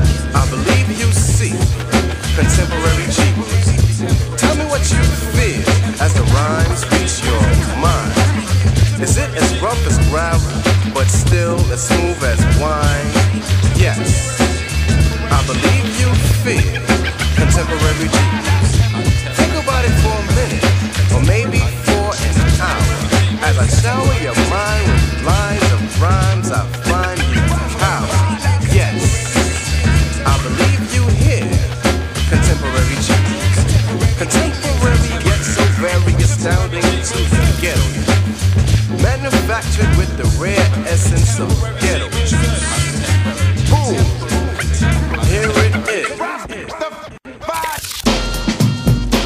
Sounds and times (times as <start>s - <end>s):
Music: 0.0s - 49.2s
Speech: 0.2s - 38.0s, 39.0s - 47.8s.